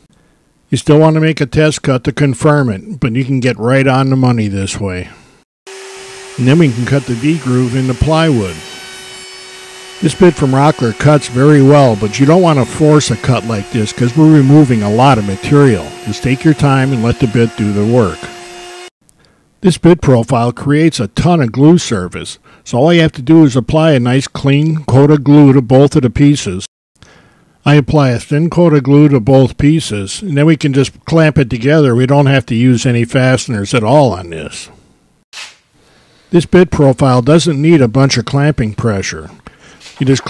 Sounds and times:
Speech: 0:00.7 - 0:05.2, 0:06.4 - 0:08.6, 0:10.0 - 0:18.3, 0:19.6 - 0:26.7, 0:27.6 - 0:34.8, 0:36.3 - 0:39.4, 0:40.0 - 0:40.2.

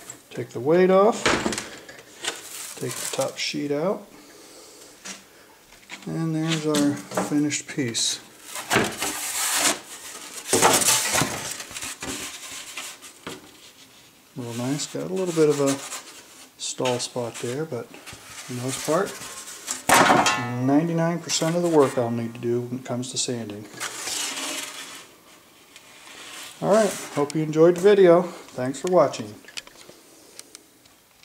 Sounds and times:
Dishes, pots, and pans: 0:20.0 - 0:20.6.

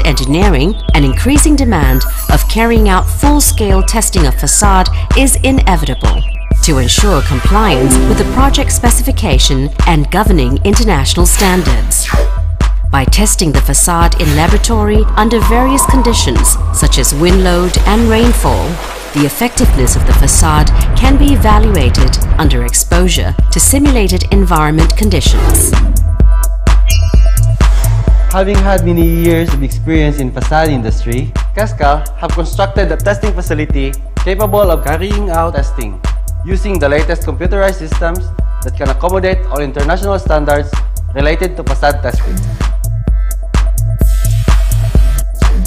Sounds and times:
Speech: 0:00.0 - 0:12.0, 0:13.0 - 0:25.7, 0:28.3 - 0:42.5
Music: 0:00.0 - 0:45.6.

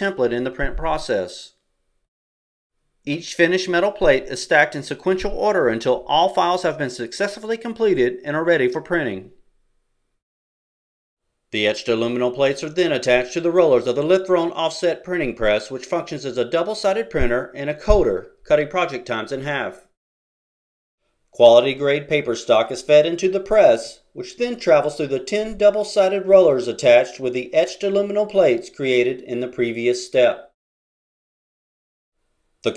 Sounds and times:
Speech: 0:00.0 - 0:01.6, 0:03.1 - 0:09.4, 0:11.6 - 0:19.9, 0:21.4 - 0:30.6.

